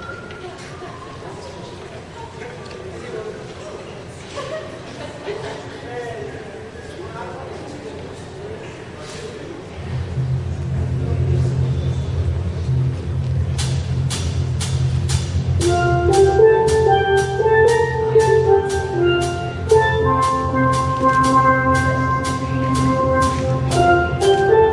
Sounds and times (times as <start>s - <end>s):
Speech: 0.1s - 12.2s
Percussion: 10.1s - 24.7s.